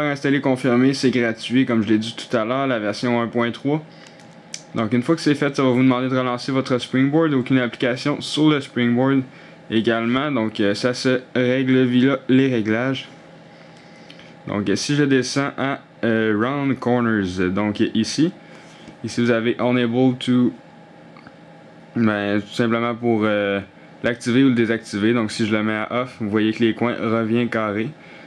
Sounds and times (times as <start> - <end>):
Speech: 0.0 - 3.9, 4.6 - 13.2, 14.5 - 18.4, 19.0 - 20.6, 22.0 - 28.0.